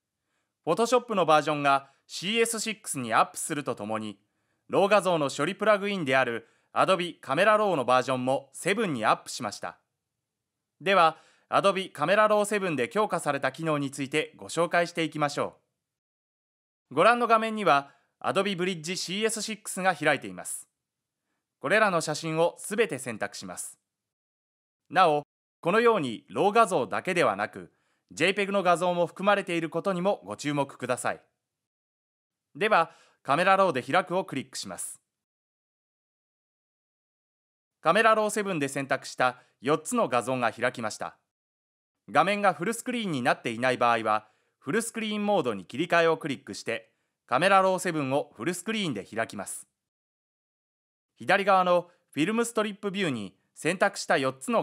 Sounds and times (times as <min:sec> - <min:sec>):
Speech: 0:00.7 - 0:09.8, 0:10.8 - 0:15.6, 0:16.9 - 0:20.7, 0:21.6 - 0:23.8, 0:24.9 - 0:31.2, 0:32.6 - 0:35.0, 0:37.9 - 0:41.2, 0:42.1 - 0:49.7, 0:51.2 - 0:54.6.